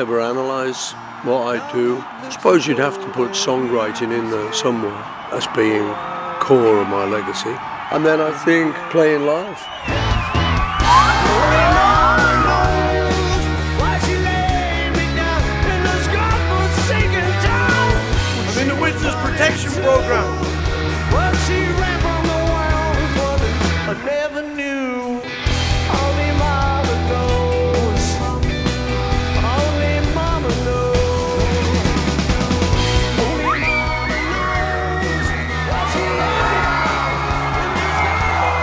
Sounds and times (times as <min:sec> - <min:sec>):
Music: 0:00.0 - 0:06.4, 0:09.6 - 0:38.6
Speech: 0:00.0 - 0:09.7, 0:18.5 - 0:20.4.